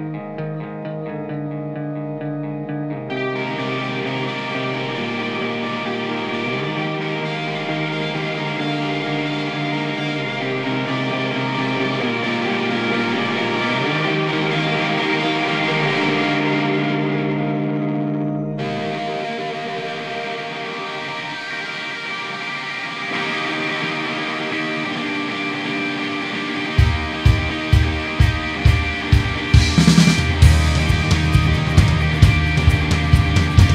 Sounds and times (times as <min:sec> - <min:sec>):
Independent music: 0:00.0 - 0:33.7.